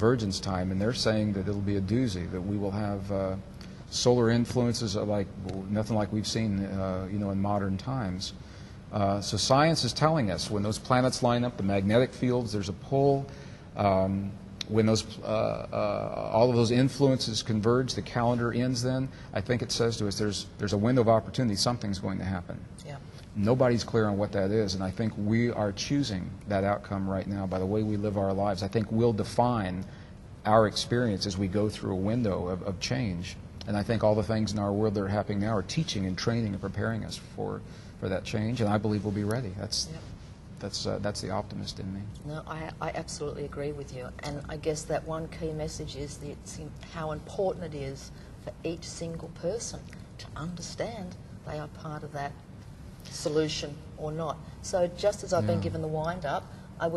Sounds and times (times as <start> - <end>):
Conversation: 0.0 - 56.9.